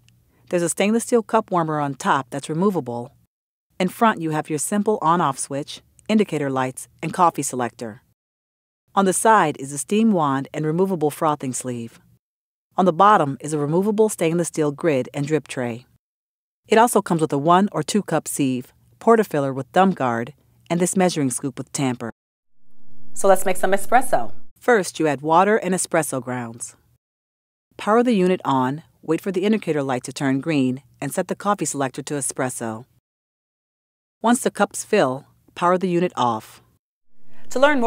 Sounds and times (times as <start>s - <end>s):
Speech: 0.5s - 3.2s, 3.8s - 8.0s, 9.0s - 12.0s, 12.8s - 15.9s, 16.7s - 22.2s, 23.2s - 26.8s, 27.8s - 32.9s, 34.2s - 36.6s, 37.5s - 37.8s.